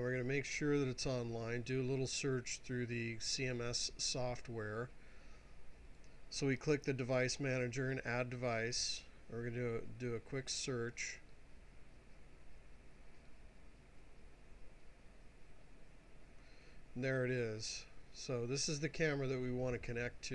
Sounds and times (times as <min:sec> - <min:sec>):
Speech: 0:00.0 - 0:04.9, 0:06.3 - 0:11.3, 0:17.0 - 0:20.3.